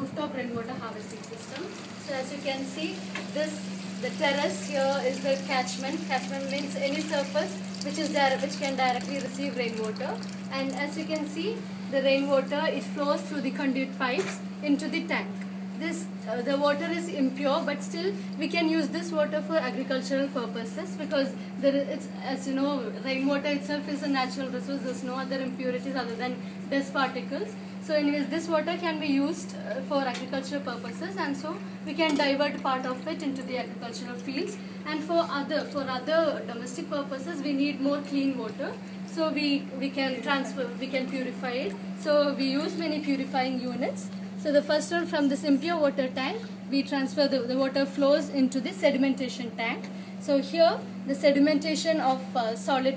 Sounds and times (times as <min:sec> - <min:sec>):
Speech: 0:00.0 - 0:52.9.